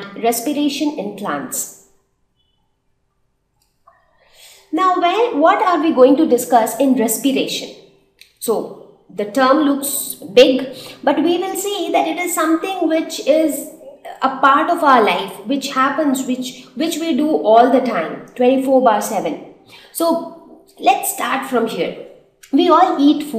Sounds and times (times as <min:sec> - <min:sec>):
Speech: 0:00.0 - 0:01.7, 0:04.7 - 0:07.8, 0:08.4 - 0:23.3.